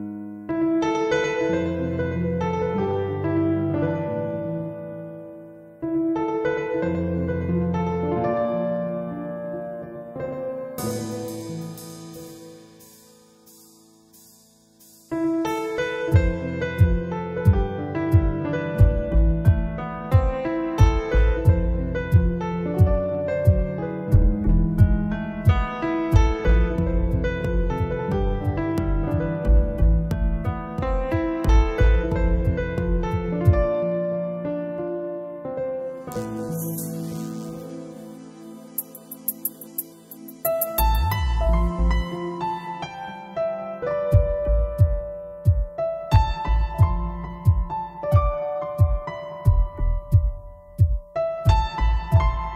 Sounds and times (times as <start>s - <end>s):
Piano: 0.0s - 52.5s.